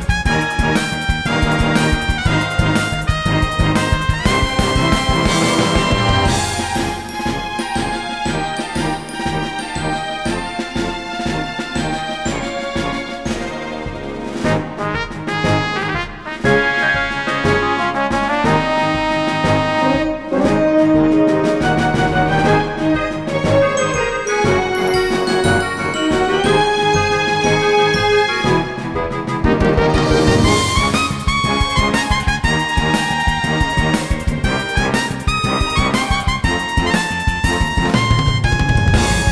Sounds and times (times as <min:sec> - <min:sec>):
Music: 0:00.0 - 0:39.3.